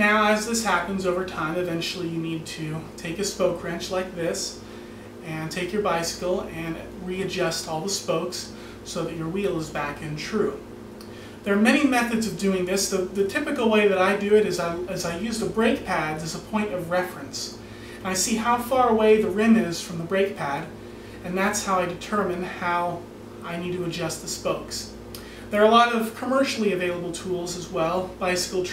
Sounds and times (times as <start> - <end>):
Speech: 0.0 - 10.7, 11.4 - 28.7.